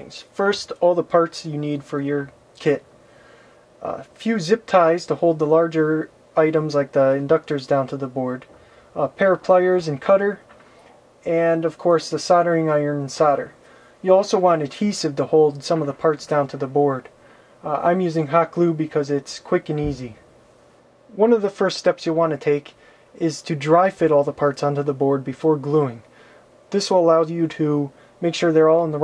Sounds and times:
Speech: 0:00.0 - 0:02.9, 0:03.8 - 0:10.5, 0:11.2 - 0:20.2, 0:21.1 - 0:26.1, 0:26.7 - 0:29.0.

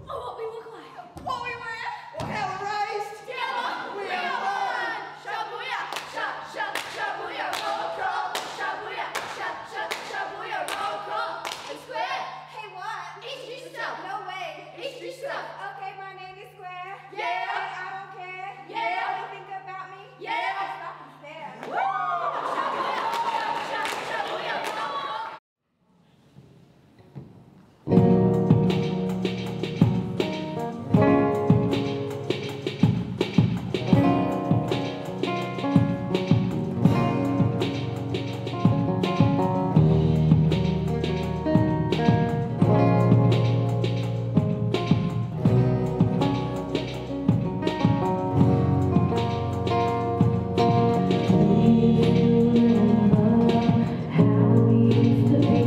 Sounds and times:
Music: 0:01.4 - 0:20.0, 0:27.8 - 0:55.6.

